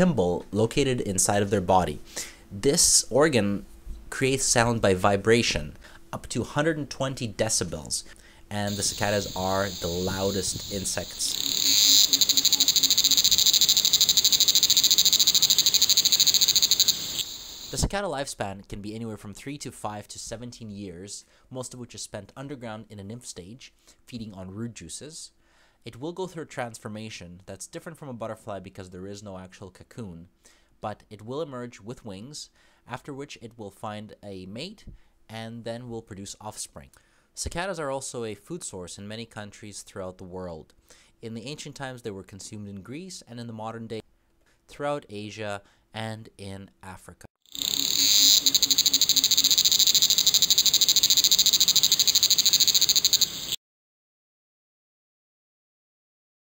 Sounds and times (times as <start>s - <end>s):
Cricket: 8.7s - 17.8s, 47.5s - 53.6s.